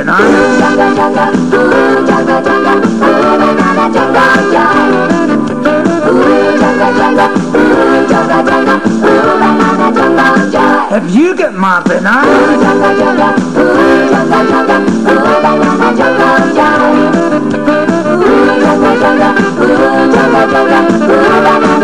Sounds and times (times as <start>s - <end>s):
Singing: 0.0s - 11.0s, 12.2s - 17.2s, 18.1s - 21.8s.